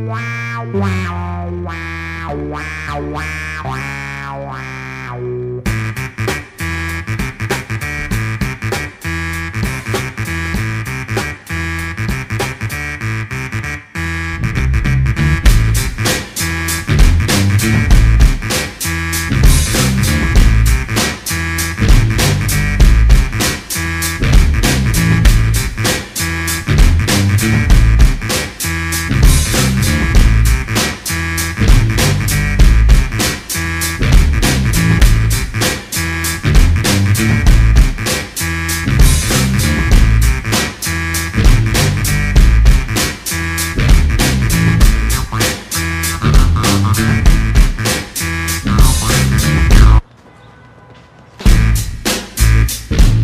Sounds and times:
Music: 0.0 - 50.0, 51.4 - 53.2.

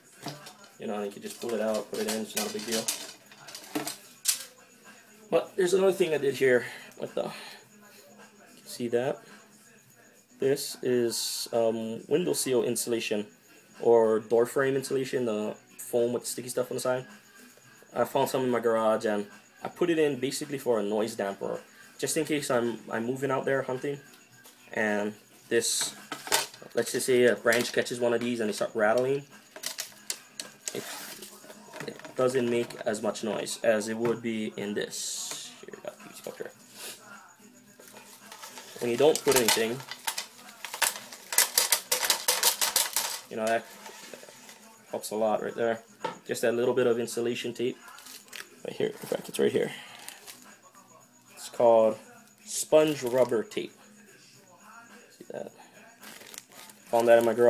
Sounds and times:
Speech: 0.2 - 3.5, 5.3 - 9.4, 10.4 - 17.1, 18.0 - 24.1, 24.7 - 26.0, 26.7 - 29.3, 30.7 - 37.5, 38.8 - 40.6, 43.3 - 43.7, 44.6 - 49.8, 50.5 - 56.0, 56.9 - 57.5.

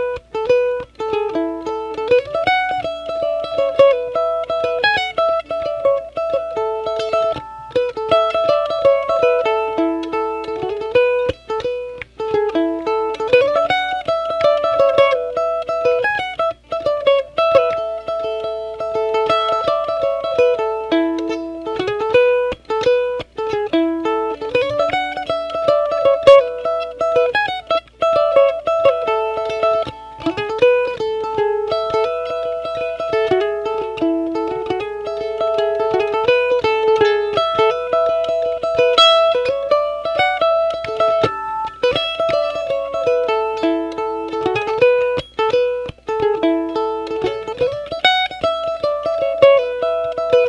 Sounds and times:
Plucked string instrument: 0.0 - 50.4.

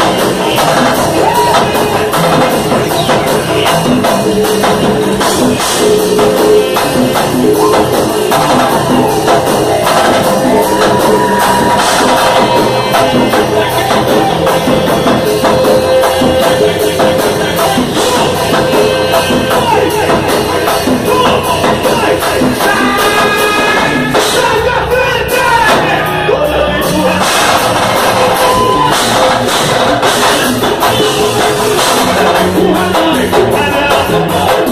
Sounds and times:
Pop music: 0.0 - 34.7.

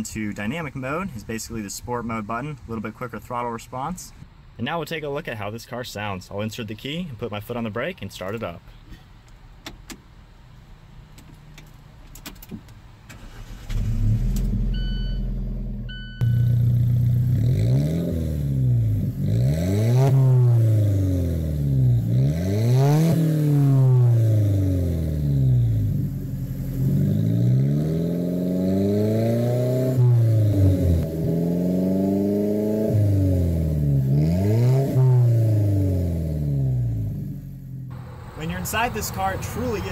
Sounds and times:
Car: 0.0 - 39.9
Outside, urban or manmade: 0.0 - 39.9.

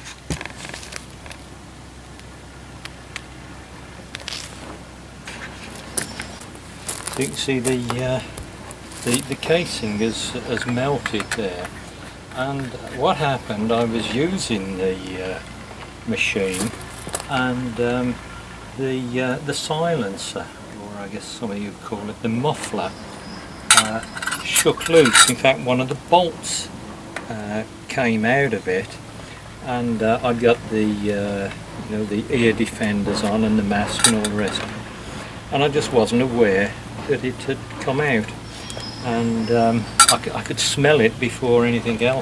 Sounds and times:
Speech: 7.2 - 8.4, 9.0 - 11.7, 12.3 - 23.0, 23.7 - 26.7, 27.3 - 29.0, 29.6 - 34.8, 35.5 - 38.4, 39.0 - 42.2.

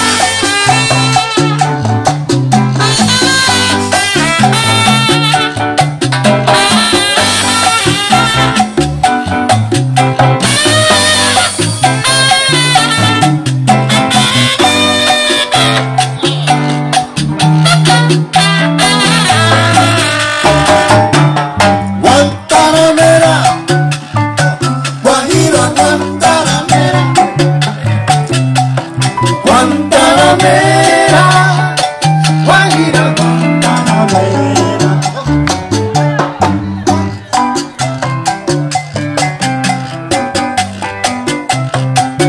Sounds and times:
Percussion: 0.0 - 42.2.

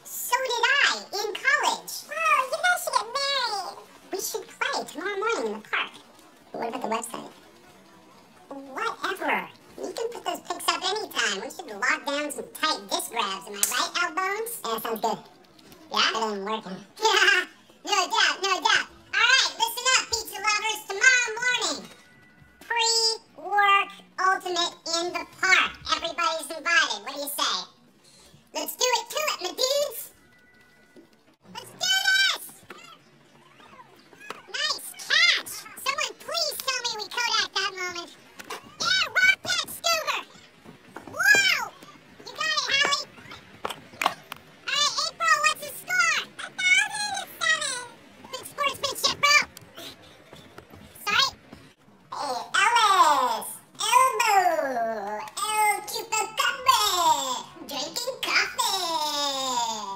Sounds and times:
Speech: 0.1 - 22.0, 22.6 - 27.8, 28.5 - 30.2, 31.5 - 32.6, 34.5 - 40.4, 41.2 - 43.1, 44.7 - 49.9, 52.1 - 59.9.

